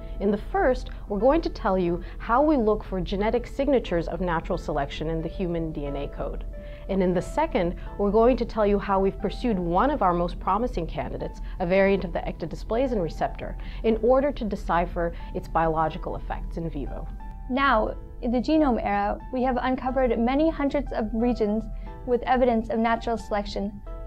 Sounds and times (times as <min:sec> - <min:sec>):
Music: 0:00.0 - 0:24.0
Speech: 0:00.2 - 0:23.8.